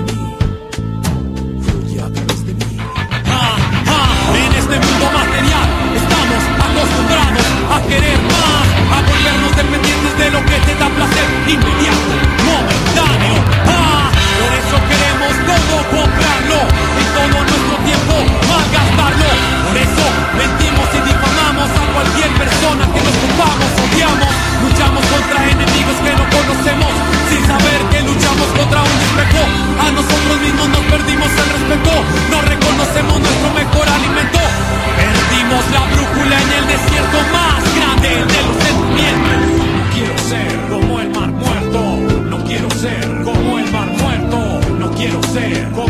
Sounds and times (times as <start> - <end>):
Music: 0.0 - 45.8.